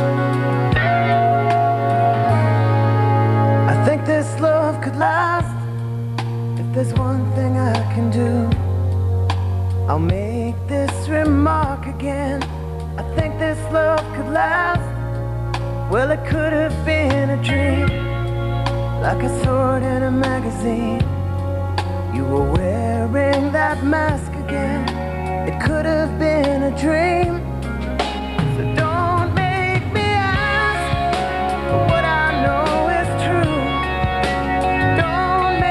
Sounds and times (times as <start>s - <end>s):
Theme music: 0.0s - 6.6s, 12.8s - 35.7s.